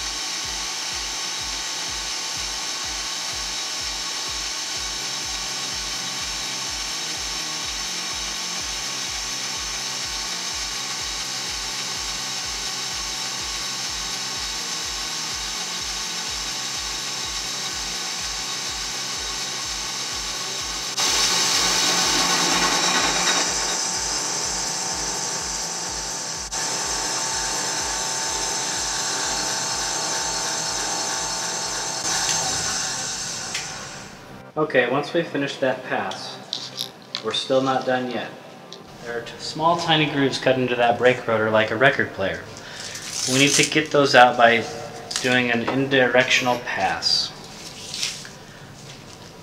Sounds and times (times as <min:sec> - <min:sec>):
Sawing: 0:00.0 - 0:34.3, 0:42.7 - 0:45.4.